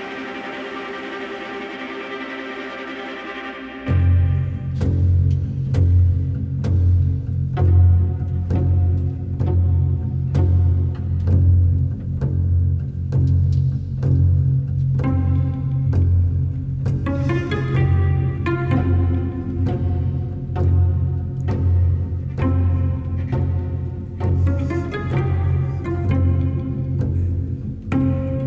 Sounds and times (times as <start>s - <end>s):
Music: 0.0s - 28.4s.